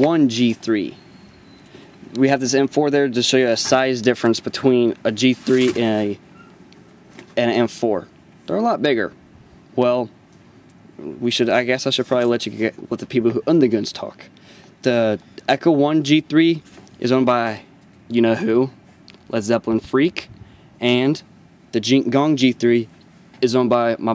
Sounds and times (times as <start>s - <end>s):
Speech: 0.0s - 1.0s, 2.2s - 6.2s, 7.4s - 9.2s, 9.8s - 10.1s, 11.0s - 24.1s.